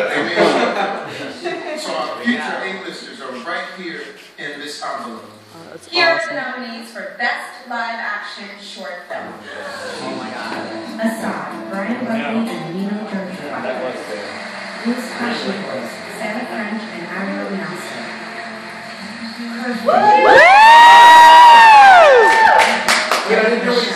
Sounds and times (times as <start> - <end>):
Male speech, man speaking: 0.0 - 6.4, 9.2 - 10.9, 11.9 - 14.3, 23.2 - 23.9
Conversation: 0.0 - 23.9
Female speech, woman speaking: 5.6 - 9.4, 10.9 - 13.6, 14.8 - 18.1.